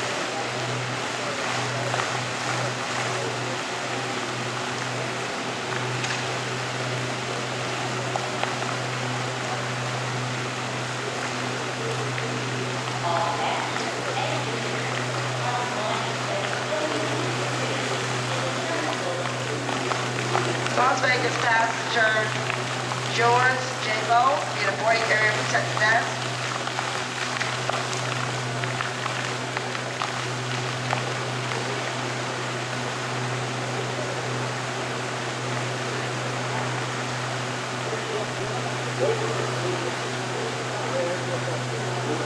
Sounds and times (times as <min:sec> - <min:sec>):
Speech: 0:07.3 - 0:26.4, 0:37.8 - 0:42.2.